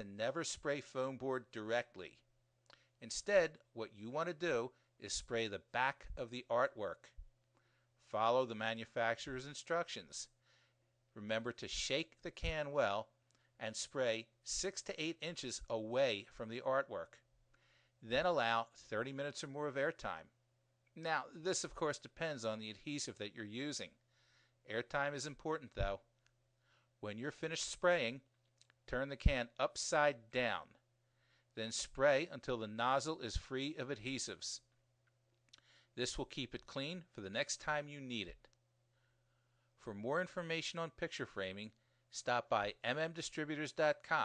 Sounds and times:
Speech: 0.0s - 2.3s, 3.0s - 7.2s, 8.0s - 10.4s, 11.2s - 17.2s, 18.0s - 20.4s, 21.0s - 24.0s, 24.7s - 26.1s, 27.0s - 28.3s, 28.9s - 30.8s, 31.6s - 34.7s, 36.0s - 38.5s, 39.8s - 44.2s.

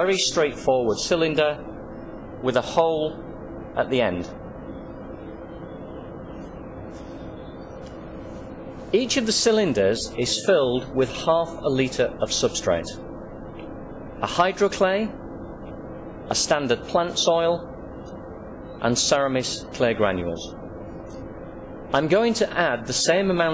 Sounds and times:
Speech: 0.0s - 1.7s, 2.4s - 3.2s, 3.8s - 4.4s, 8.9s - 13.0s, 14.2s - 15.2s, 16.3s - 17.7s, 18.8s - 20.6s, 21.9s - 23.5s.

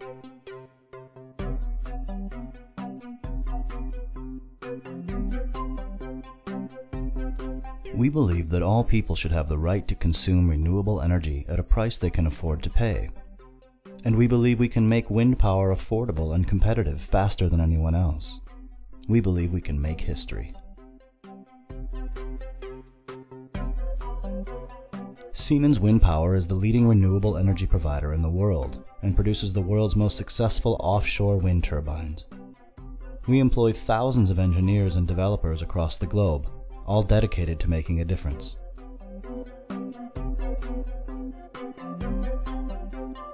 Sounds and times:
Music: 0.0s - 43.3s
Speech: 7.9s - 13.2s, 14.0s - 18.4s, 19.0s - 20.6s, 25.3s - 32.3s, 33.3s - 38.6s.

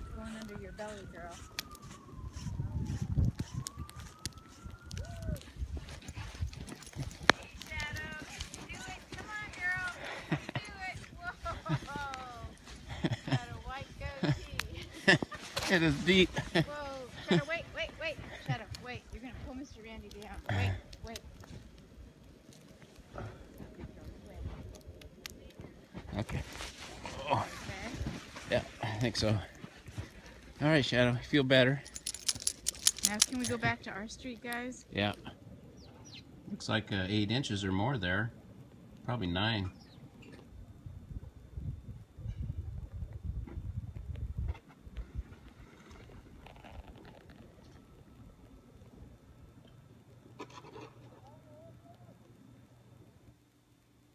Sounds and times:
Outside, urban or manmade: 0.0s - 54.1s.

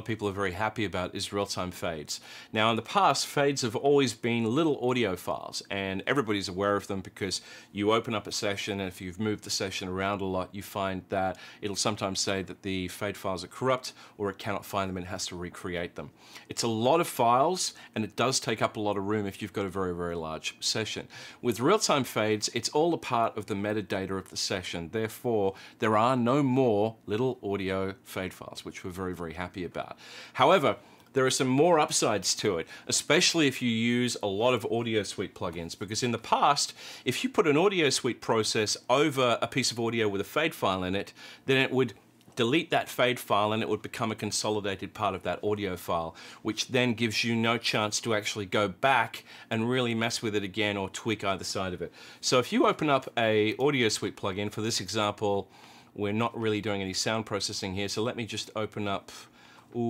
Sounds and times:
Speech: 0.0s - 59.9s.

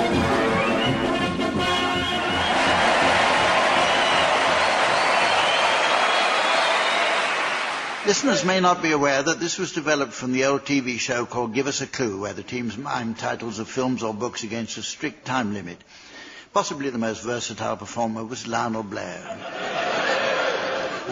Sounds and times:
Speech: 8.0s - 15.8s, 16.6s - 19.4s.

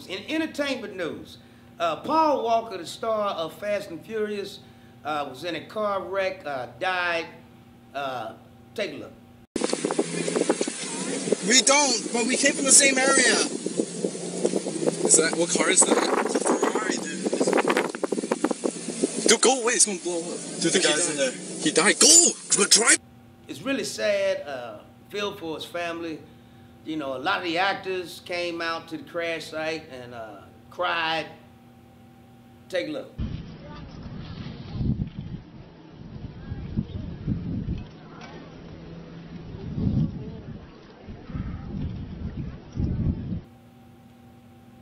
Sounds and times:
Speech: 0.0s - 7.4s, 8.0s - 9.2s, 15.1s - 17.5s, 19.3s - 26.2s, 26.9s - 31.4s, 32.7s - 33.8s.

